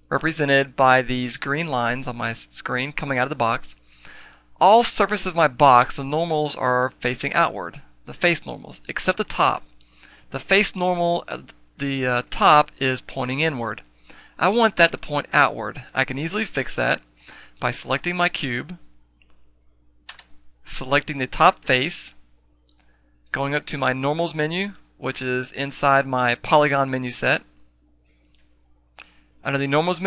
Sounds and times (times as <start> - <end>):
Speech: 0.1 - 3.8, 4.6 - 9.7, 10.3 - 13.8, 14.4 - 17.0, 17.6 - 18.9, 20.7 - 22.2, 23.3 - 27.5, 29.4 - 30.0.